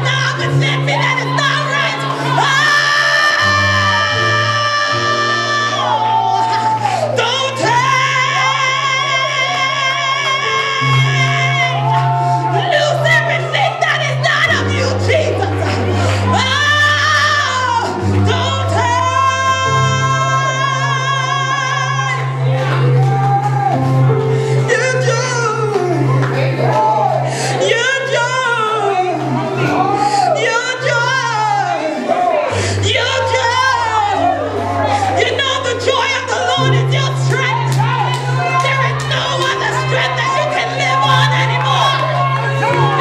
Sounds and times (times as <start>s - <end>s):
Singing: 0.0s - 24.0s
Music: 0.0s - 43.0s.